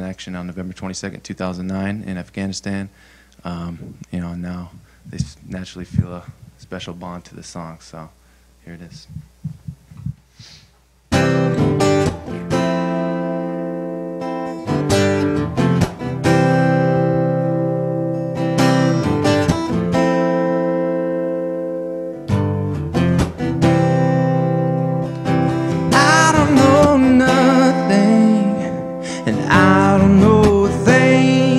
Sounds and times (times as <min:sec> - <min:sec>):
Speech: 0:00.0 - 0:09.2.